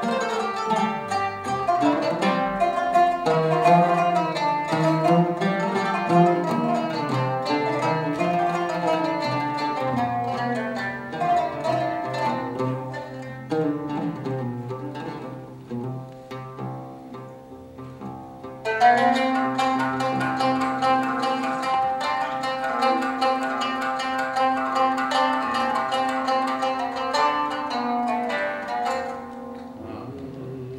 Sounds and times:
Music: 0:00.0 - 0:30.7.

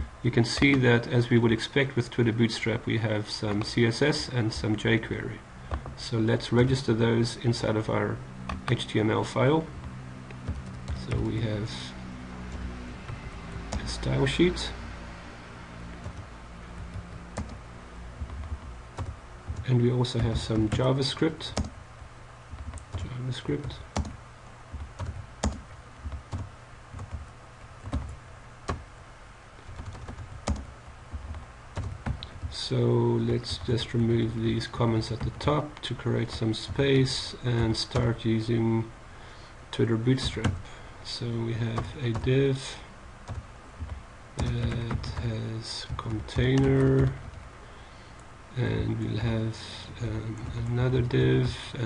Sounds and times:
Speech: 0:00.2 - 0:05.4, 0:06.0 - 0:09.7, 0:11.0 - 0:12.0, 0:13.8 - 0:14.8, 0:19.6 - 0:21.6, 0:23.0 - 0:23.9, 0:32.5 - 0:38.9, 0:39.7 - 0:42.9, 0:44.4 - 0:47.2, 0:48.6 - 0:51.8.

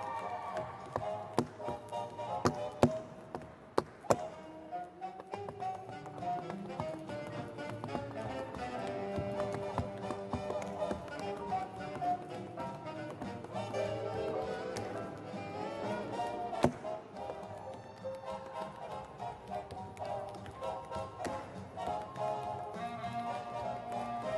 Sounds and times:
Music: 0:00.0 - 0:24.3
Tap: 0:00.6 - 0:04.3, 0:05.2 - 0:13.8, 0:16.6 - 0:17.8.

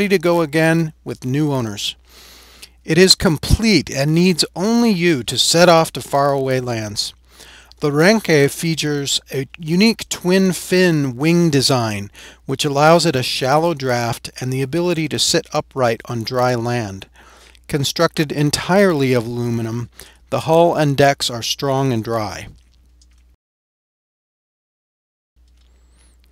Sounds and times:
Speech: 0:00.0 - 0:02.0, 0:02.8 - 0:07.2, 0:07.8 - 0:17.1, 0:17.7 - 0:22.6.

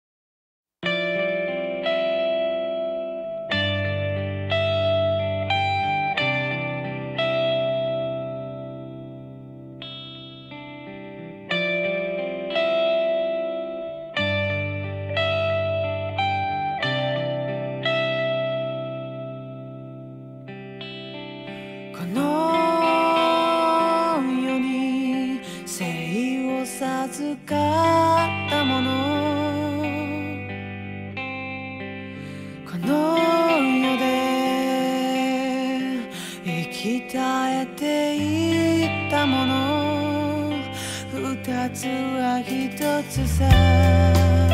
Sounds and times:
Music: 0:00.8 - 0:44.5.

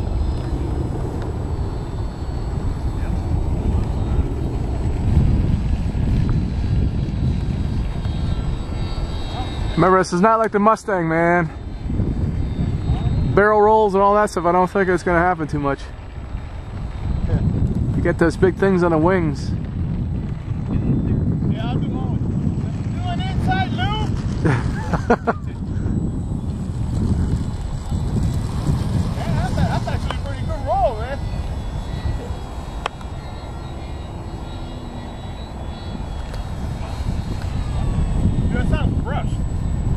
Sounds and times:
Aircraft: 0:00.0 - 0:39.9.

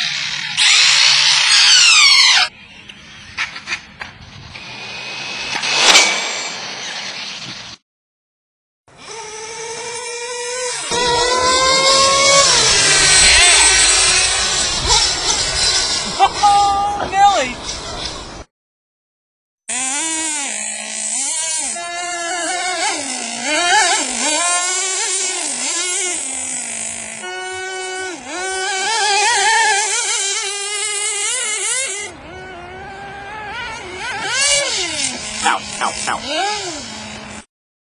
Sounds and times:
Car: 0:30.3 - 0:37.4.

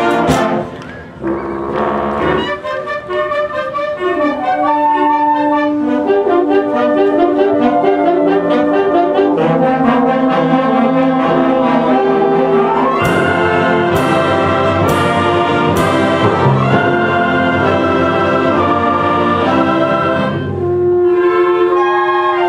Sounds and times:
Classical music: 0:00.0 - 0:22.4
Trombone: 0:00.0 - 0:22.4
Trumpet: 0:00.0 - 0:22.4.

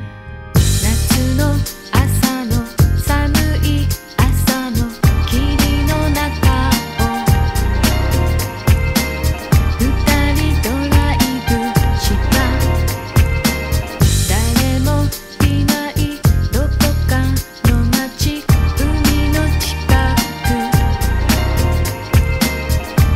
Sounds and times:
Music: 0:00.0 - 0:23.1.

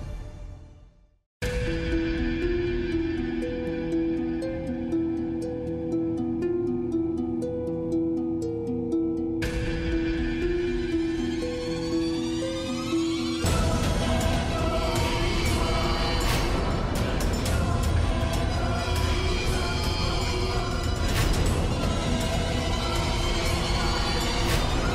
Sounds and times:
Music: 0:00.0 - 0:24.9.

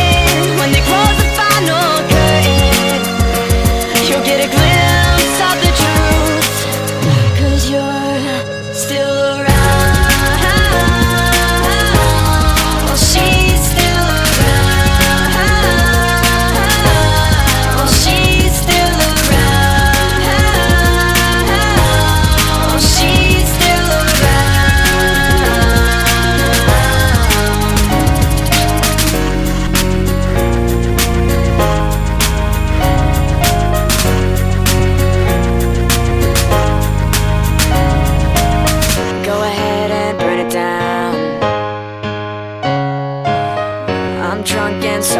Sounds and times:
Pop music: 0:00.0 - 0:41.8, 0:43.3 - 0:45.1.

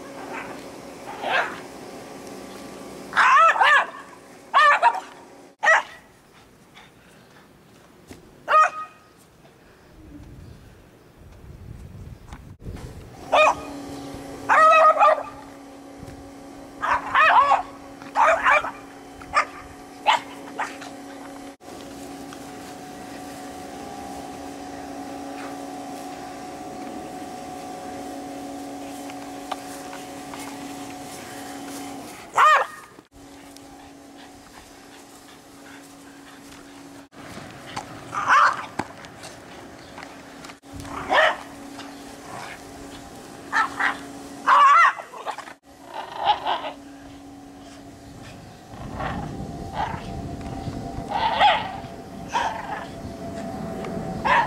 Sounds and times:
Bow-wow: 0:01.2 - 0:01.6, 0:03.2 - 0:04.0, 0:04.6 - 0:06.0, 0:08.5 - 0:09.0, 0:13.3 - 0:13.7, 0:14.5 - 0:15.4, 0:16.8 - 0:18.8, 0:32.4 - 0:32.8, 0:38.2 - 0:38.7, 0:41.0 - 0:41.5, 0:43.5 - 0:45.4, 0:51.1 - 0:52.9, 0:54.2 - 0:54.4
Yip: 0:03.2 - 0:04.0, 0:04.6 - 0:06.0, 0:08.5 - 0:09.0, 0:13.3 - 0:13.7, 0:14.5 - 0:15.3, 0:16.8 - 0:18.8, 0:32.4 - 0:32.8, 0:38.2 - 0:38.7, 0:41.1 - 0:41.4, 0:51.2 - 0:51.8.

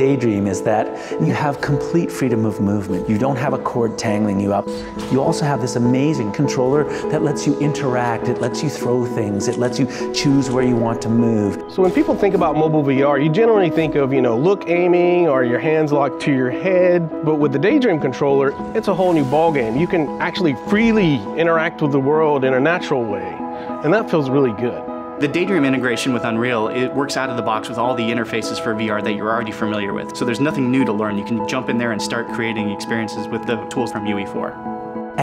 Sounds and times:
Speech: 0:00.0 - 0:34.6
Music: 0:00.0 - 0:35.2.

